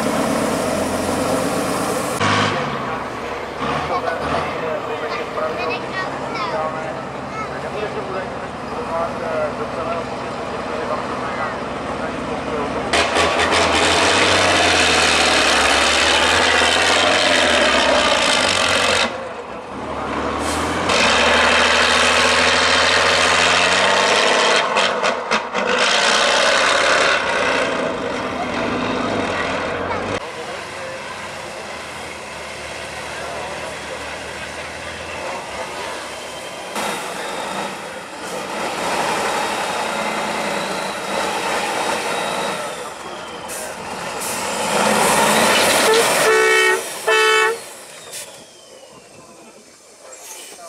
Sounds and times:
Truck: 0.0s - 50.6s
Speech: 3.8s - 13.0s, 29.4s - 32.3s, 48.9s - 50.6s.

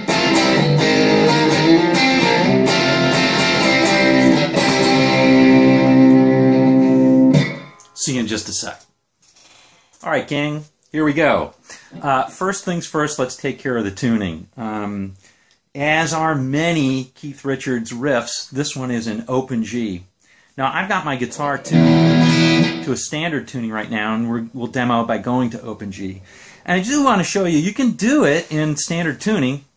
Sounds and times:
Electronic tuner: 0.0s - 8.0s, 21.4s - 22.9s
Guitar: 0.0s - 8.5s, 20.6s - 25.6s
Speech: 8.0s - 8.9s, 10.0s - 15.2s, 15.8s - 21.8s, 22.8s - 29.7s.

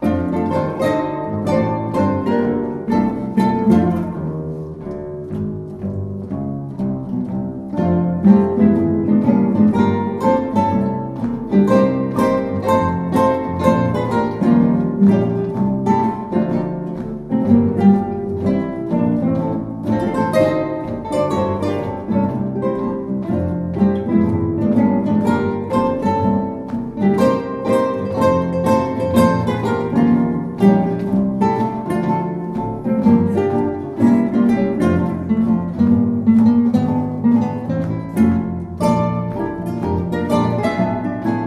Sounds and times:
Acoustic guitar: 0.0s - 41.4s
Orchestra: 0.0s - 41.4s.

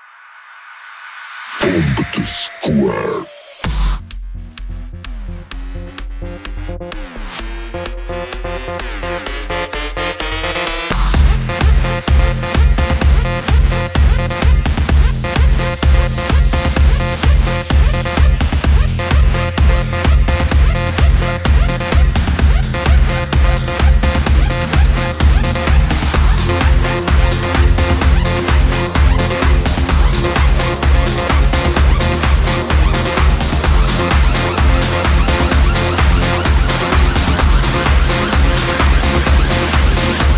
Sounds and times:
Music: 0.0s - 40.3s.

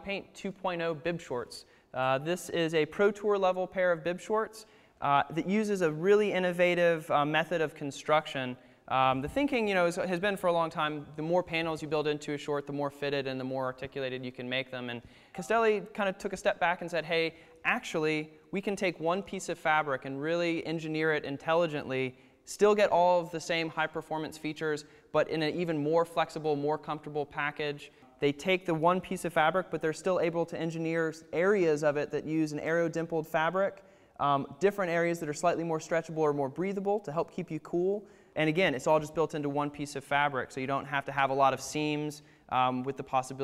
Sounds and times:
Speech: 0.0s - 43.4s.

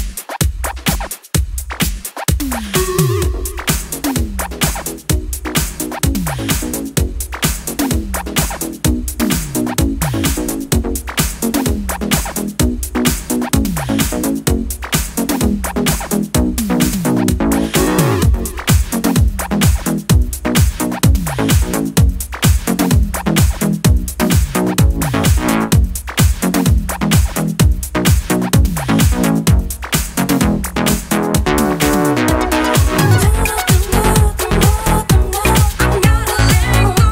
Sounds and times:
Disco: 0.0s - 37.1s
Electronic music: 0.0s - 37.1s.

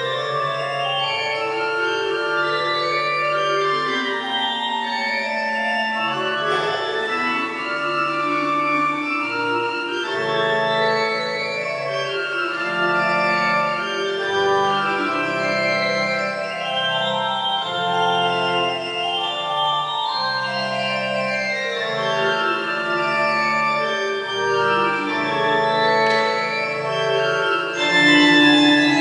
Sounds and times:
Organ: 0.0s - 29.0s
Piano: 0.0s - 29.0s.

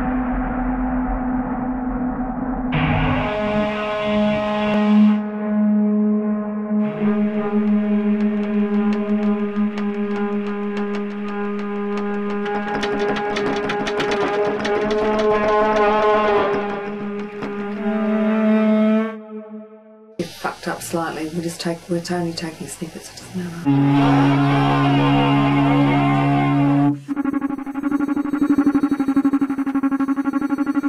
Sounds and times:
Wind instrument, woodwind instrument: 13.9s - 19.8s, 23.7s - 27.7s.

